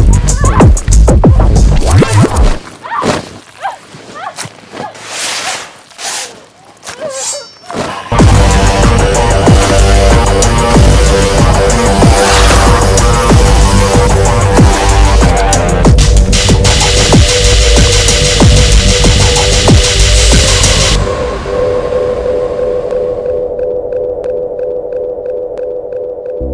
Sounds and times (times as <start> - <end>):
Drum and bass: 0.0 - 2.6, 8.1 - 22.6.